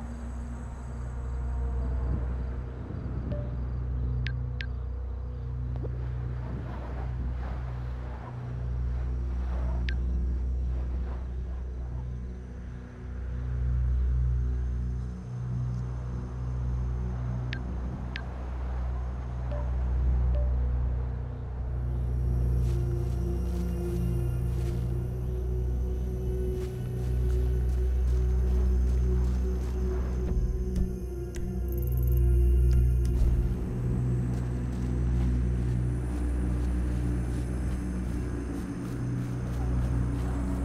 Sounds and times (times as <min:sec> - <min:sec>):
Music: 0:00.0 - 0:40.6
Outside, rural or natural: 0:00.0 - 0:40.6.